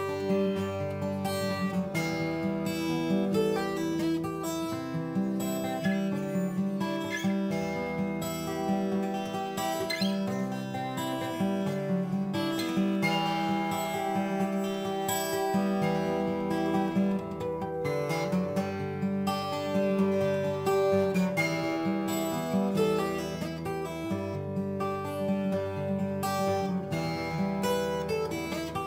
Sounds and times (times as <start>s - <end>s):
Acoustic guitar: 0.0s - 28.8s.